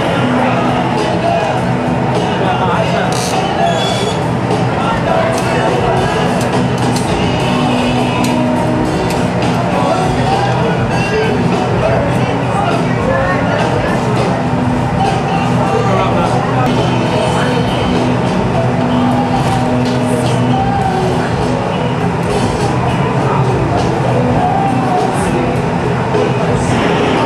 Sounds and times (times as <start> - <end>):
Inside, public space: 0.0 - 27.2
Music: 0.0 - 27.2
Speech: 0.0 - 27.2.